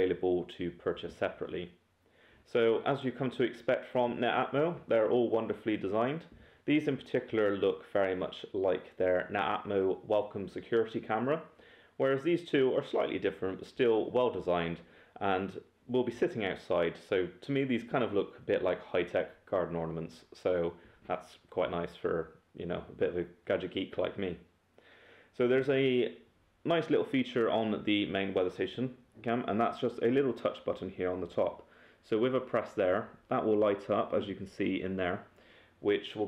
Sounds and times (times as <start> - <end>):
Speech: 0.0 - 1.8, 2.4 - 24.5, 25.3 - 36.2.